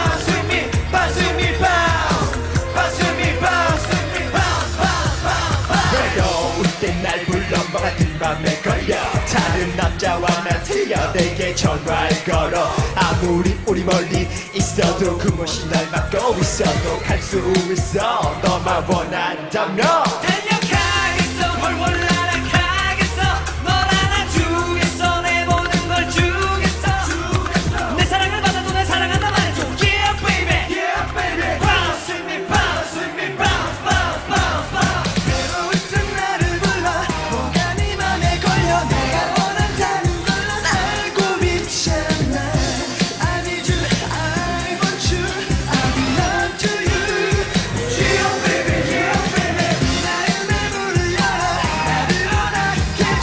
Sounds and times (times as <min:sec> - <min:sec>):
Music: 0:00.0 - 0:53.2.